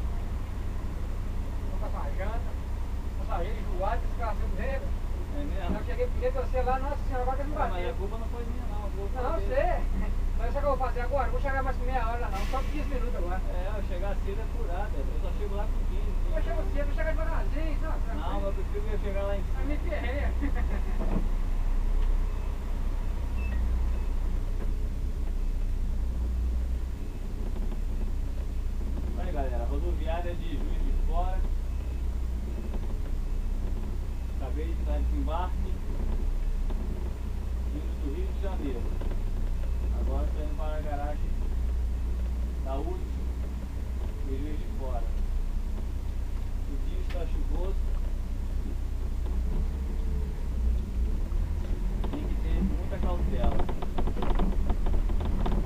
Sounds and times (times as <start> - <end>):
Speech: 1.7 - 2.6, 3.2 - 20.5, 29.2 - 31.5, 34.4 - 35.9, 37.7 - 38.9, 39.9 - 41.5, 42.6 - 43.2, 44.2 - 45.2, 46.6 - 47.8, 52.1 - 53.7.